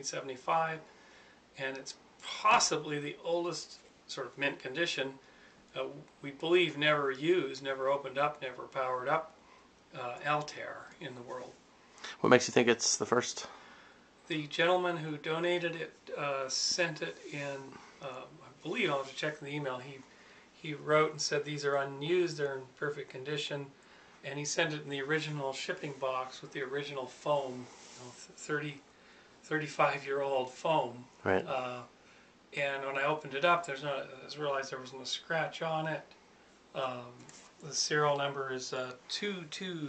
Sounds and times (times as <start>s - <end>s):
Speech: 0.0s - 0.9s, 1.6s - 5.2s, 5.8s - 13.6s, 14.3s - 20.0s, 20.6s - 28.8s, 29.5s - 32.0s, 32.6s - 36.2s, 36.8s - 39.8s.